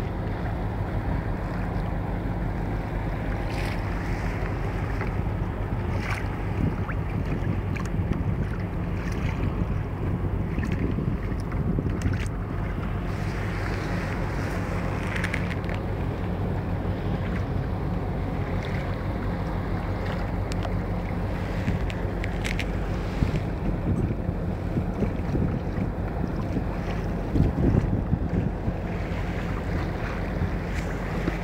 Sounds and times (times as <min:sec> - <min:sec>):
Boat, Water vehicle: 0:00.0 - 0:31.4.